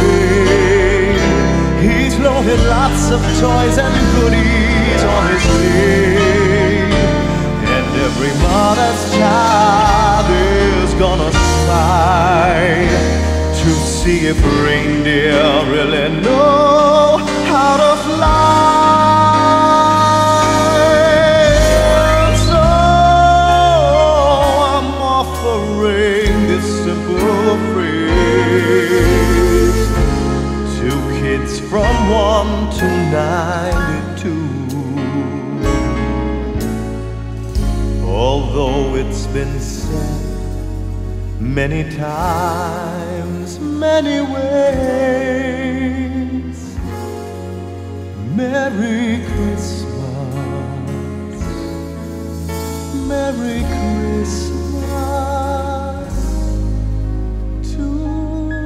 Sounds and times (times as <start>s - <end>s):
Christian music: 0.0s - 58.6s
Christmas music: 0.0s - 58.6s.